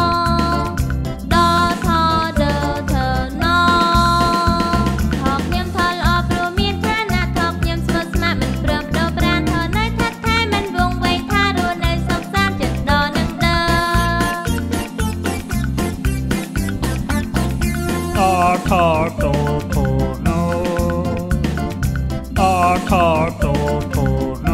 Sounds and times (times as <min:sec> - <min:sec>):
Acoustic guitar: 0:00.0 - 0:24.5
Music for children: 0:00.0 - 0:24.5.